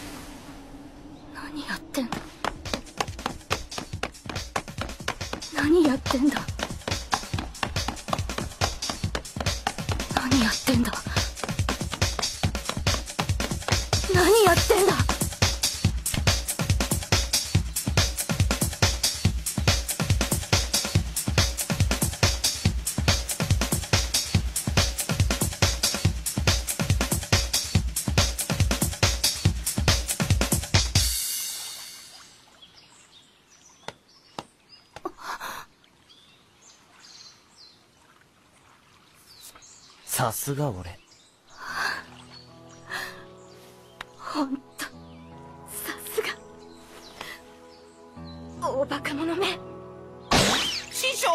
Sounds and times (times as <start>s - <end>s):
Chirp, tweet: 32.6s - 35.0s, 36.0s - 37.9s, 39.2s - 40.1s, 40.8s - 45.6s, 46.4s - 48.6s.